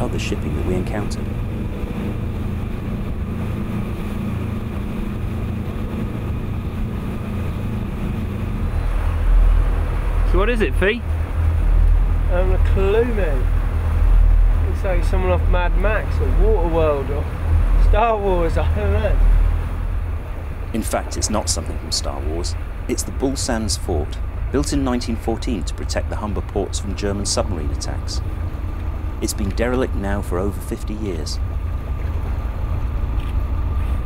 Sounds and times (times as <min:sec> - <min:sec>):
Speech: 0:00.0 - 0:01.2, 0:10.3 - 0:11.0, 0:12.3 - 0:13.5, 0:14.7 - 0:19.2, 0:20.7 - 0:28.2, 0:29.2 - 0:31.4
Motorboat, speedboat: 0:00.0 - 0:34.0.